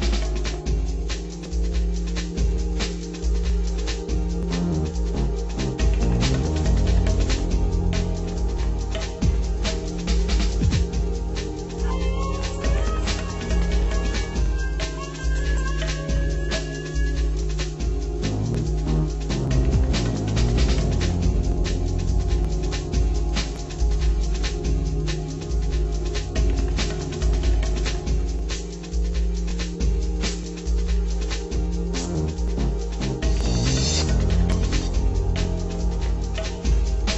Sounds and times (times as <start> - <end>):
Music: 0.0 - 37.1.